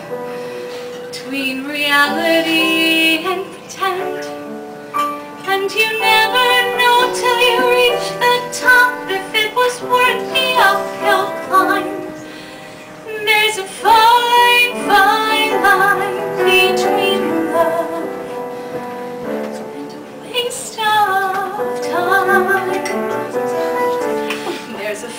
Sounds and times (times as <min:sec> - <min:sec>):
Music: 0:00.0 - 0:25.1
Female singing: 0:01.1 - 0:04.4, 0:05.4 - 0:12.2, 0:13.1 - 0:18.2, 0:19.5 - 0:25.1.